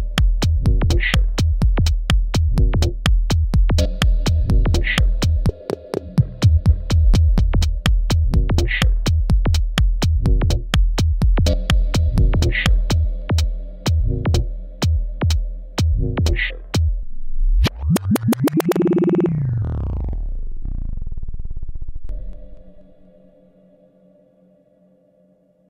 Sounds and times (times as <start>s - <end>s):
Techno: 0.0s - 1.7s, 3.8s - 5.4s, 8.3s - 9.6s, 17.7s - 21.6s
Synthesizer: 17.6s - 21.2s.